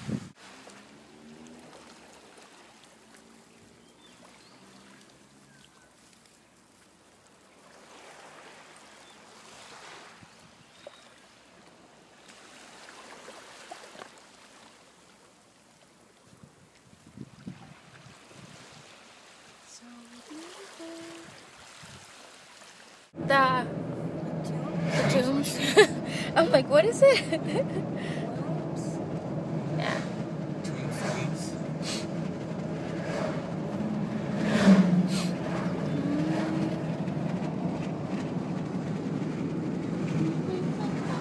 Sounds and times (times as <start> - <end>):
Water: 0.0 - 41.2
Speech: 23.2 - 23.7, 24.4 - 27.5, 30.7 - 31.6, 40.2 - 41.2.